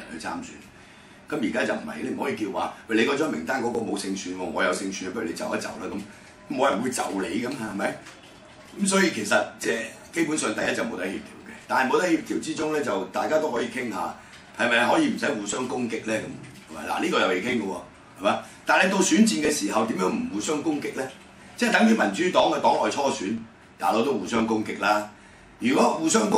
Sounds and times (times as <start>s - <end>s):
Speech: 0.0s - 0.7s, 1.3s - 26.3s.